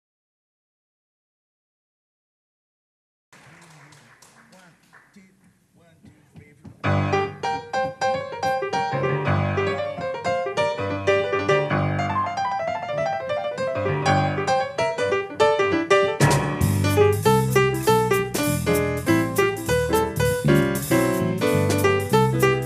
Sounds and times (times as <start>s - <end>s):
Piano: 6.6s - 22.6s.